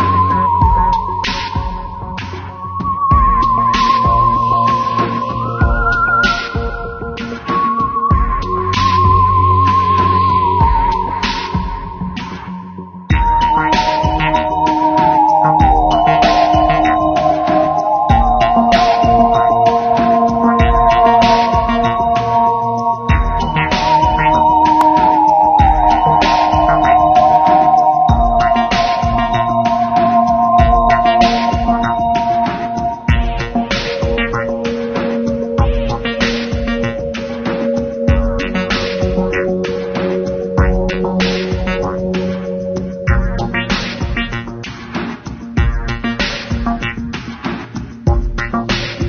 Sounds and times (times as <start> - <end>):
Scary music: 0.0 - 49.0.